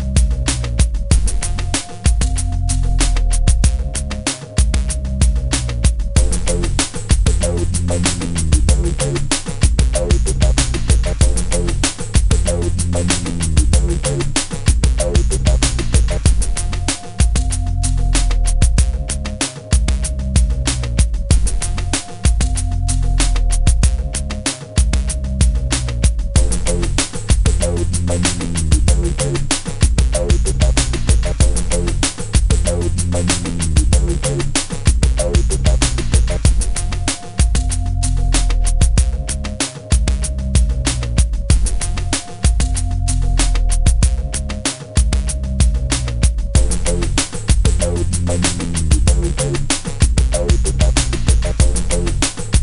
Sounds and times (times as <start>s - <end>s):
Theme music: 6.2s - 19.1s, 26.4s - 34.6s, 46.6s - 52.2s.